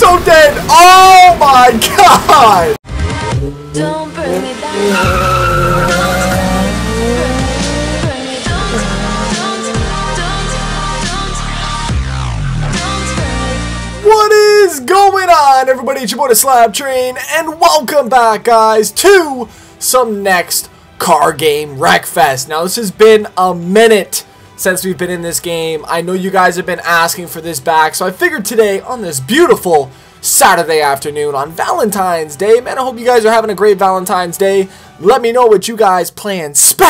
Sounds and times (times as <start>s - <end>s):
Race car, auto racing: 3.0s - 10.4s.